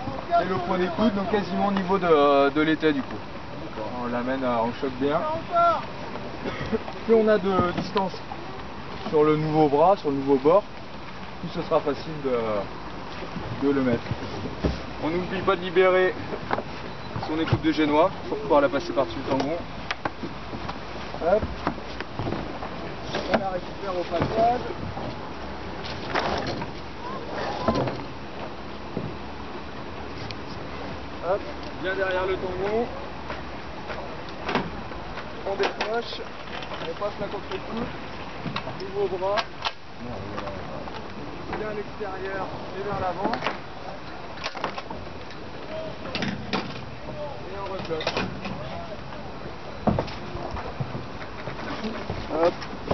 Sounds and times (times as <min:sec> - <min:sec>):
Boat, Water vehicle: 0:00.0 - 0:52.9
Wind: 0:00.0 - 0:52.9.